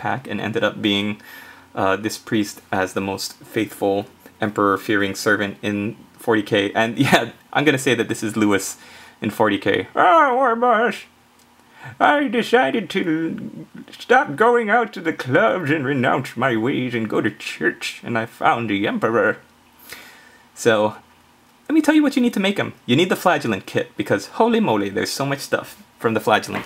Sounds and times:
Speech: 0.0 - 11.1, 11.9 - 19.5, 20.6 - 21.0, 21.7 - 26.6.

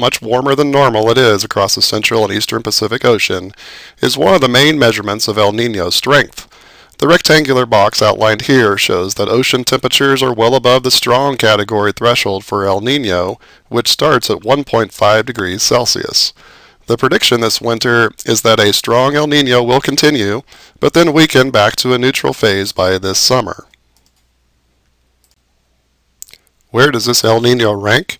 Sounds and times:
Speech: 0.0 - 23.8, 26.2 - 28.1.

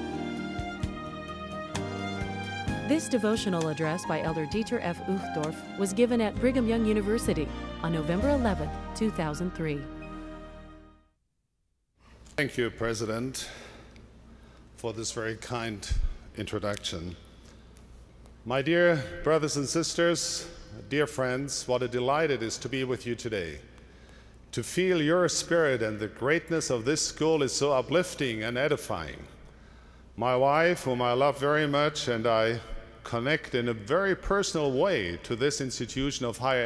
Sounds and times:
Speech: 2.9 - 9.9, 12.4 - 13.6, 14.8 - 17.2, 18.5 - 23.6, 24.6 - 29.3, 30.2 - 36.6.

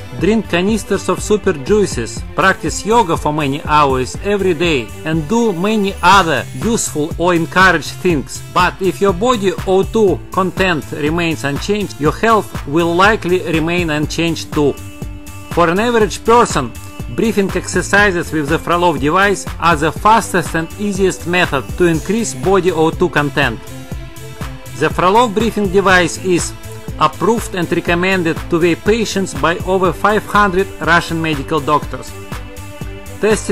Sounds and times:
Music: 0.0 - 33.5
Speech: 0.1 - 14.8, 15.5 - 23.6, 24.8 - 32.2, 33.2 - 33.5.

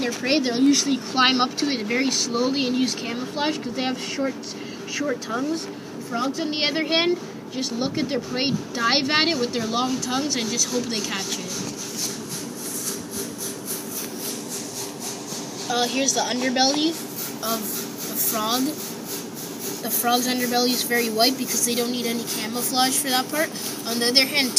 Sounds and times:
Speech: 0.0 - 11.7, 15.7 - 18.8, 19.8 - 24.5.

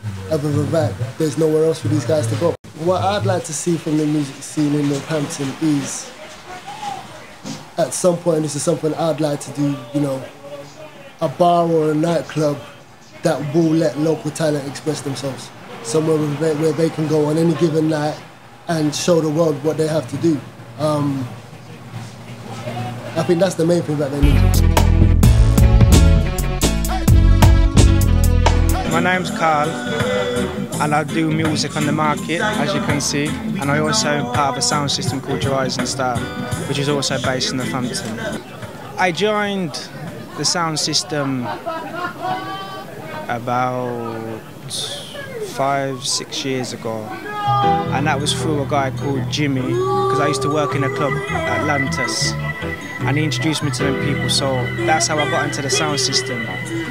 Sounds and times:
Chatter: 0.0 - 7.8, 28.8 - 56.9
Speech: 0.3 - 21.3, 22.4 - 24.4, 28.9 - 29.8, 30.8 - 38.4, 39.0 - 41.6, 42.3 - 52.4, 53.0 - 56.9
Music: 24.2 - 38.8, 47.5 - 56.9.

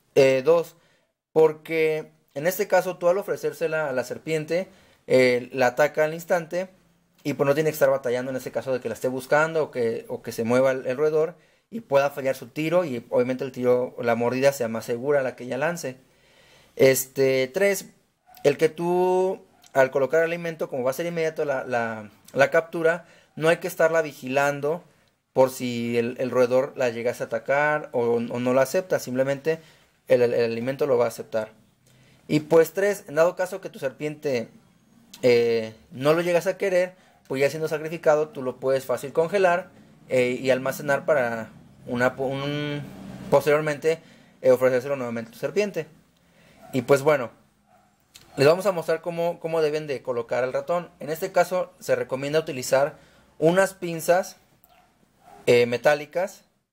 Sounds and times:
Inside, small room: 0.0 - 56.7
Speech: 0.2 - 0.8, 1.4 - 16.0, 16.8 - 24.8, 25.4 - 31.6, 32.3 - 34.6, 35.2 - 45.9, 46.7 - 47.4, 48.2 - 54.4, 55.5 - 56.5.

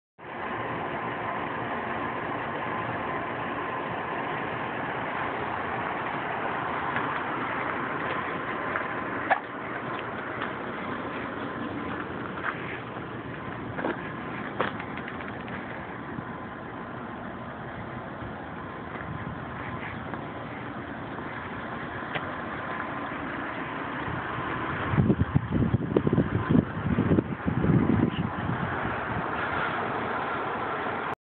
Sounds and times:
Car: 0.2 - 31.2.

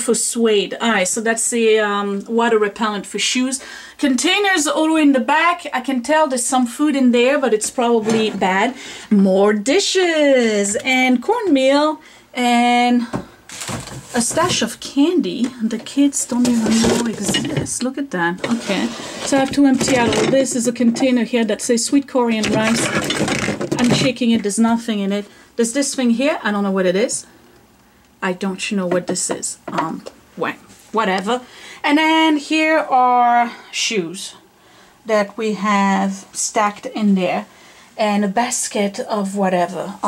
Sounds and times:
Speech: 0.0 - 13.2, 14.1 - 23.1, 23.7 - 27.3, 28.2 - 34.4, 35.1 - 40.0
Inside, small room: 0.0 - 40.0.

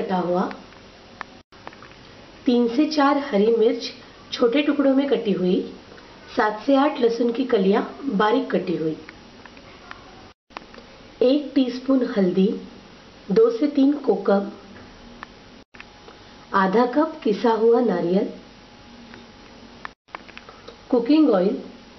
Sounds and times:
Speech: 0.0 - 0.6, 2.4 - 10.4, 11.2 - 12.7, 13.3 - 14.8, 16.5 - 18.5, 20.9 - 21.8.

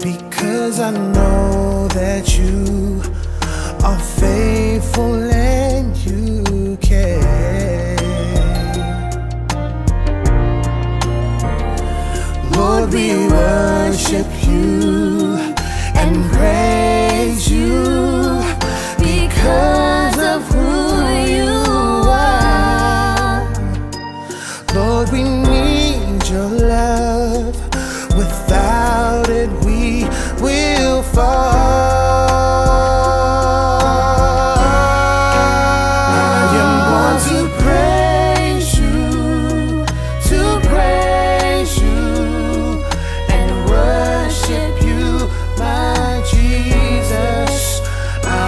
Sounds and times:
Music: 0.0 - 48.4.

